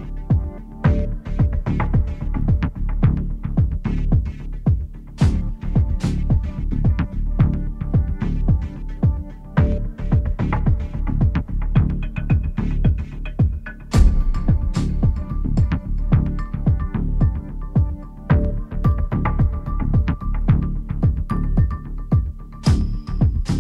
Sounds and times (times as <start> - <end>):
Rhythm and blues: 0.0 - 23.6.